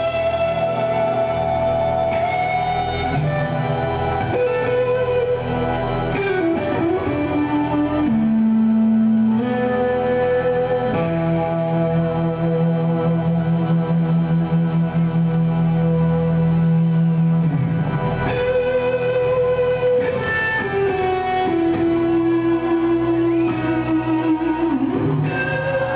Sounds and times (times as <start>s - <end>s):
Electric guitar: 0.0s - 25.9s.